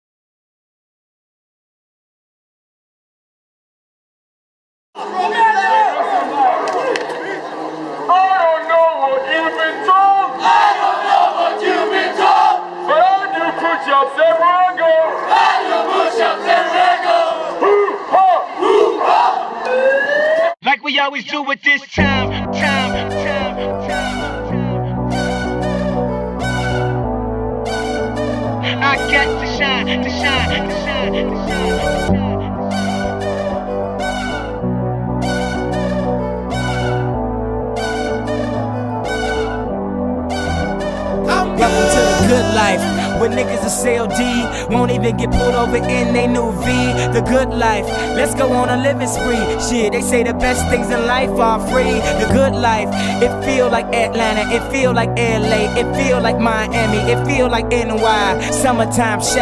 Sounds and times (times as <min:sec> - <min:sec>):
Speech: 0:08.1 - 0:10.4, 0:20.6 - 0:22.4.